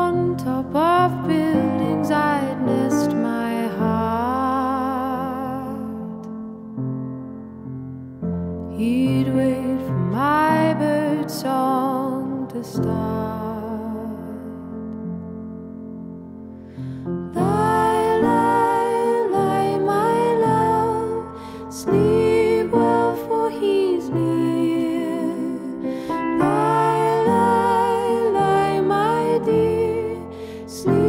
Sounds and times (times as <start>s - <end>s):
Music: 0.0s - 31.0s.